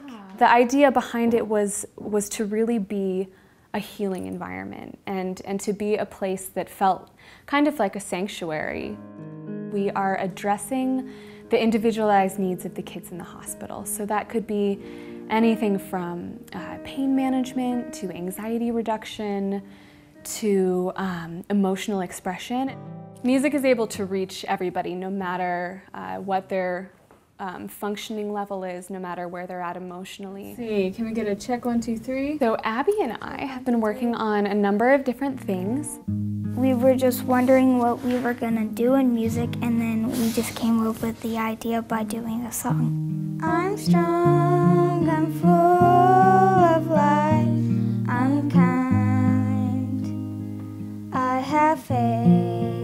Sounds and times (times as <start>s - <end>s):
Speech: 0.0s - 9.0s, 20.3s - 36.0s, 36.6s - 42.9s
Music: 7.6s - 26.9s, 29.7s - 52.8s.